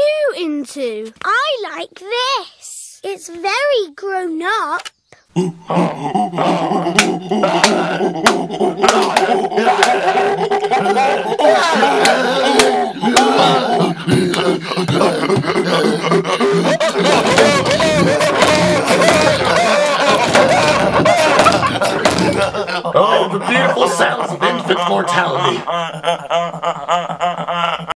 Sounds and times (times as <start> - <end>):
Speech: 22.9 - 25.7.